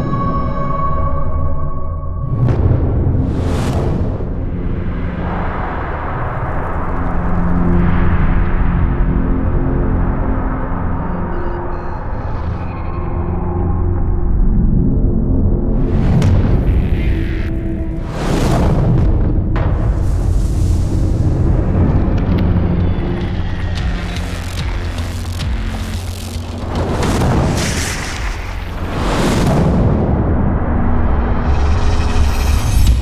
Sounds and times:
Eruption: 0:00.0 - 0:12.1, 0:13.4 - 0:33.0
Music: 0:00.0 - 0:33.0.

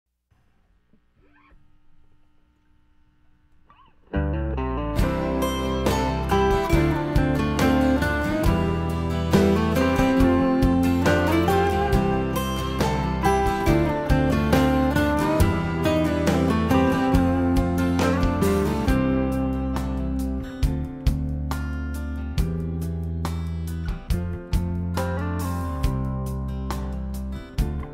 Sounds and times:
Music: 0:03.7 - 0:27.9.

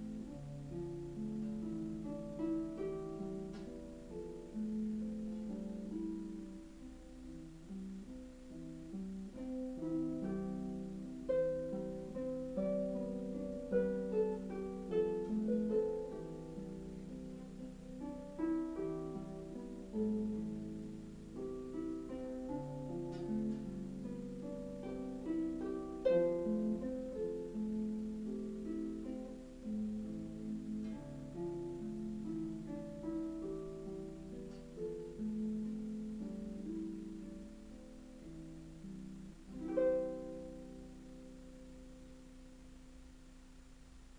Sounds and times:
Harp: 0:00.0 - 0:44.1.

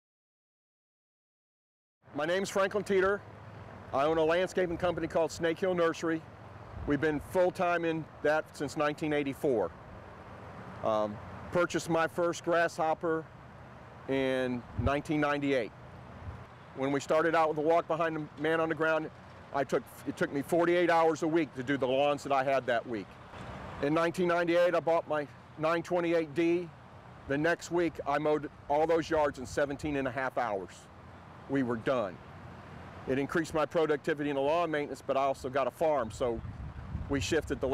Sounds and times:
Vehicle: 0:02.0 - 0:37.7
Speech: 0:02.1 - 0:03.2, 0:03.9 - 0:06.2, 0:06.9 - 0:09.7, 0:10.8 - 0:13.3, 0:14.1 - 0:15.7, 0:16.8 - 0:23.2, 0:23.8 - 0:26.7, 0:27.3 - 0:30.9, 0:31.5 - 0:32.2, 0:33.1 - 0:36.4, 0:37.1 - 0:37.7
Lawn mower: 0:02.5 - 0:29.6, 0:30.8 - 0:35.8.

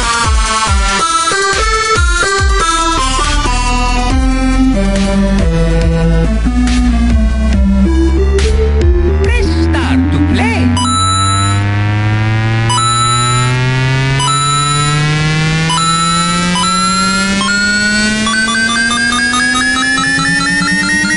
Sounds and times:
Dubstep: 0:00.0 - 0:21.1
Speech: 0:09.3 - 0:10.8.

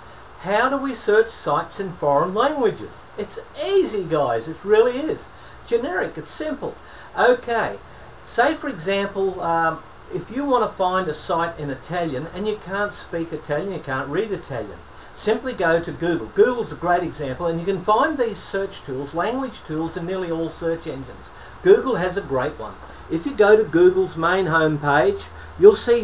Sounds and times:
Speech: 0:00.4 - 0:26.0.

